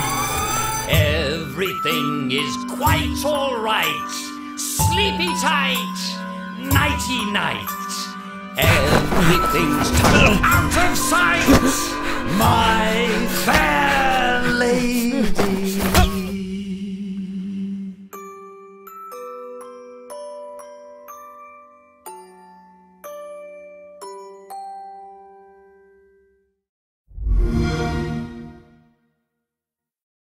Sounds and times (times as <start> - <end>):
Glockenspiel: 0.0 - 15.1, 18.1 - 26.6
Marimba, xylophone: 0.9 - 13.6, 18.1 - 26.2.